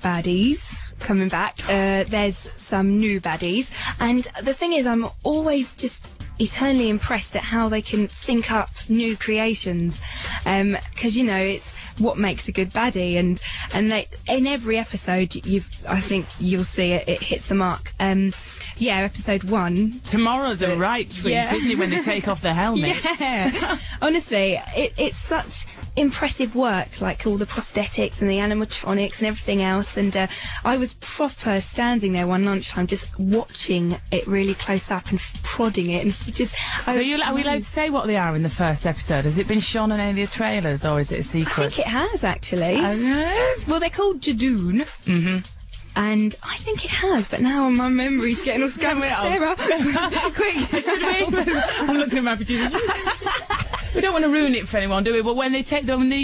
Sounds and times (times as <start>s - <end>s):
Speech: 0.0s - 56.2s.